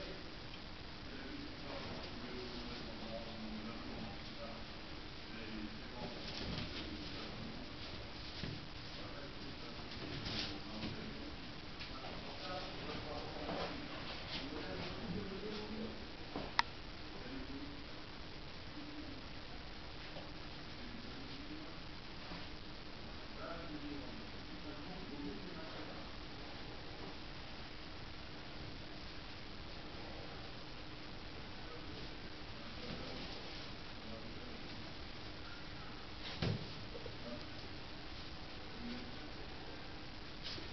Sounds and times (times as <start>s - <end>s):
Speech: 0.0s - 0.4s, 1.1s - 18.0s, 18.6s - 21.9s, 23.3s - 26.2s, 31.5s - 37.7s, 38.6s - 40.7s.